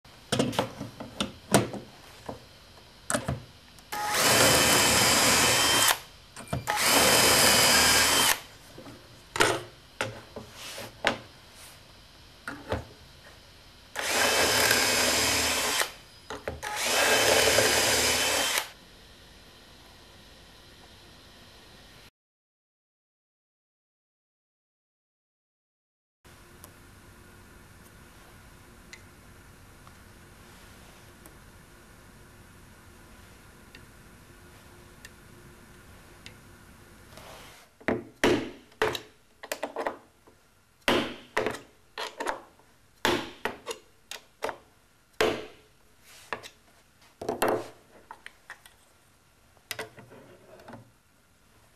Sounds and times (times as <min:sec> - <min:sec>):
Drill: 0:03.9 - 0:08.5, 0:14.0 - 0:16.0, 0:16.6 - 0:18.8.